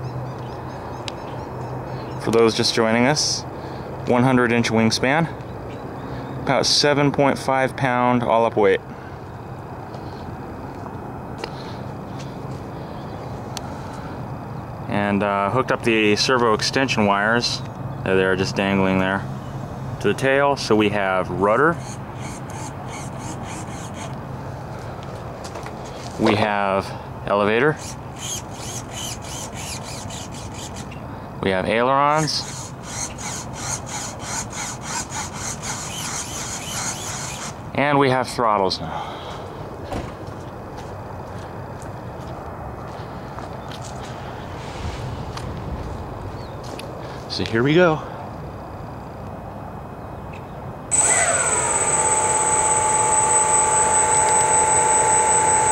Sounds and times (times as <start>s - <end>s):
Speech: 2.2s - 3.5s, 4.1s - 5.4s, 6.5s - 8.8s, 14.9s - 19.3s, 20.0s - 21.8s, 26.2s - 27.8s, 31.4s - 32.5s, 37.8s - 39.0s, 47.3s - 48.2s.